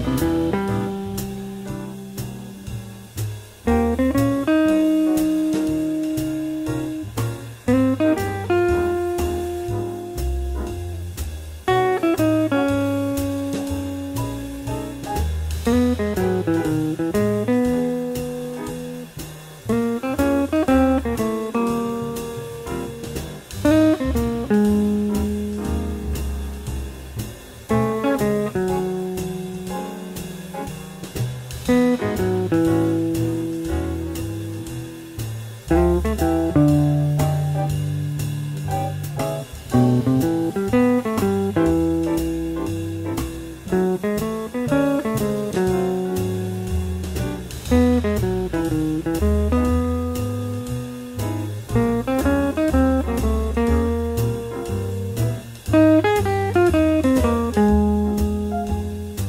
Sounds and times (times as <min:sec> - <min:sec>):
Acoustic guitar: 0:00.0 - 0:59.2
Jazz: 0:00.0 - 0:59.2
Strum: 0:00.0 - 0:59.2.